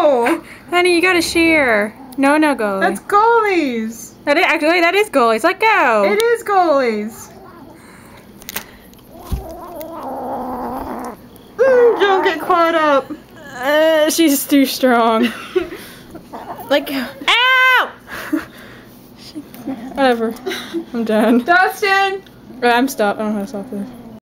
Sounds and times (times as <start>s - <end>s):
Speech: 21.0s - 24.0s.